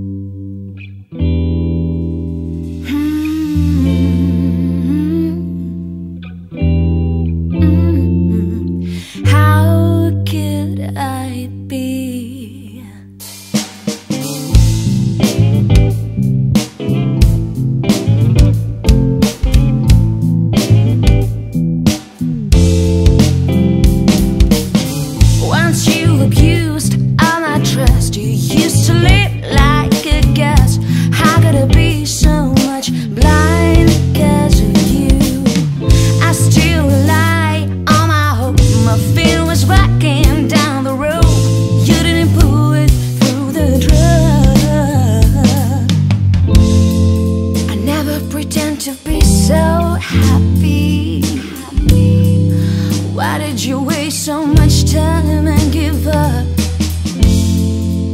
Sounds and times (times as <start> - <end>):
Drum kit: 2.5 - 4.3, 13.2 - 58.1
Bass drum: 13.4 - 47.9, 49.1 - 53.2, 54.6 - 58.1.